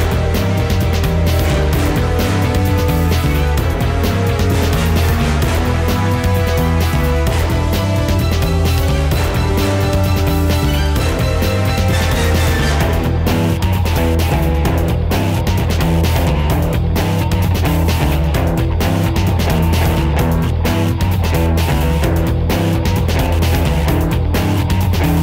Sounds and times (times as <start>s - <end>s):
Music: 0.0s - 25.2s.